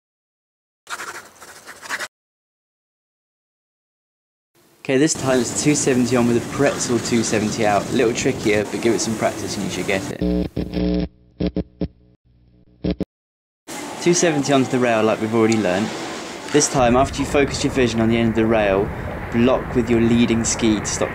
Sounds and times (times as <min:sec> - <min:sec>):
Speech: 0:04.8 - 0:10.2, 0:14.0 - 0:15.9, 0:16.5 - 0:21.1.